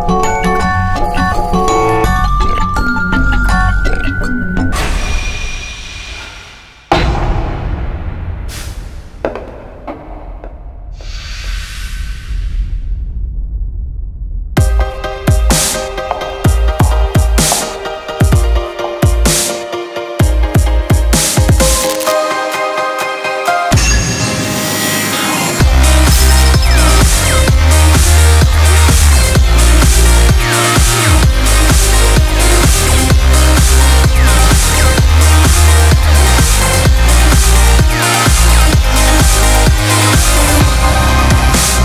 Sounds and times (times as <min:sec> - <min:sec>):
Music: 0:00.0 - 0:10.9, 0:14.6 - 0:41.8.